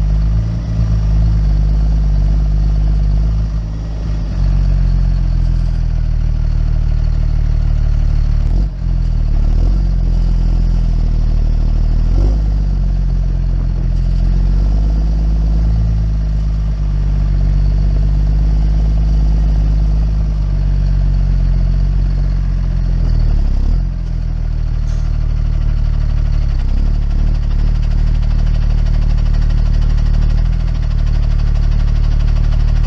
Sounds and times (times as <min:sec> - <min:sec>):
Outside, rural or natural: 0:00.0 - 0:32.8
Vehicle: 0:00.0 - 0:32.8.